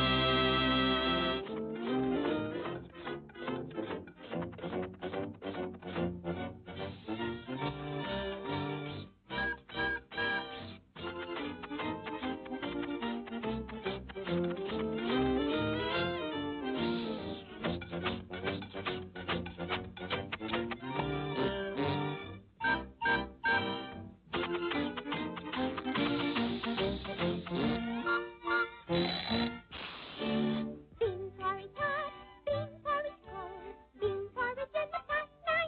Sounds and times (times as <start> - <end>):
Music: 0.0 - 35.6.